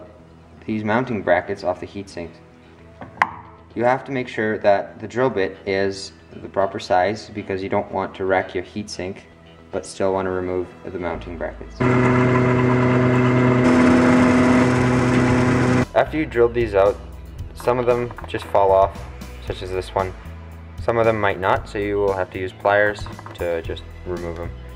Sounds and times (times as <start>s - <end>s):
Speech: 0.0s - 2.4s, 3.8s - 11.8s, 15.9s - 20.2s, 20.8s - 24.5s
Music: 0.0s - 24.7s.